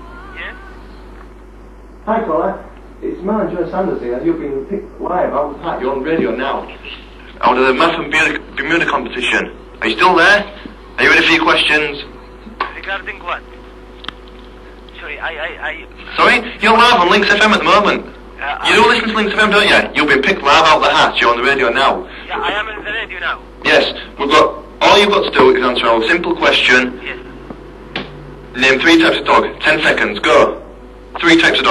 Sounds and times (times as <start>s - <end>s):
Speech: 2.0s - 13.4s, 15.0s - 27.2s.